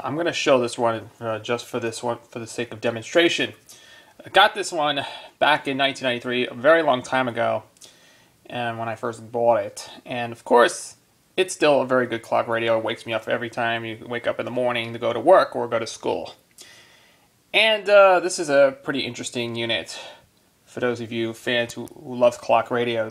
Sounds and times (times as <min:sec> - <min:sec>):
Speech: 0:00.0 - 0:03.6, 0:04.2 - 0:07.7, 0:08.5 - 0:16.4, 0:17.6 - 0:23.1.